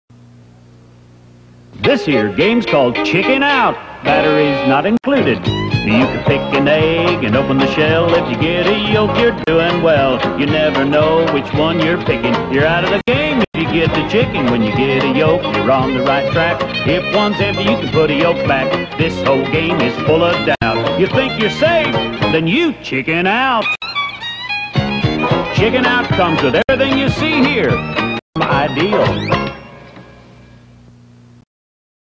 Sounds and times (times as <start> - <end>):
Music: 1.7 - 23.0, 23.6 - 30.9
Speech: 1.8 - 6.2, 21.7 - 23.7, 25.5 - 27.8, 28.4 - 29.3.